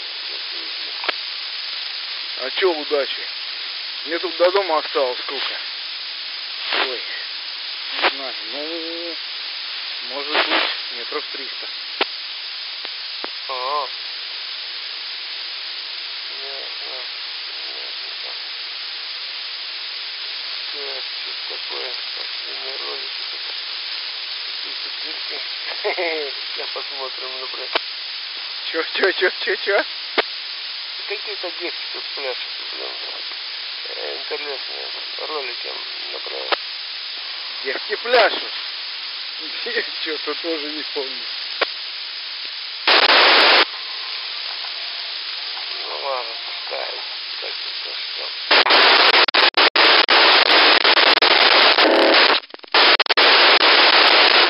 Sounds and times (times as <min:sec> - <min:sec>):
Frying (food): 0:00.0 - 0:54.5
Sizzle: 0:00.0 - 0:54.5.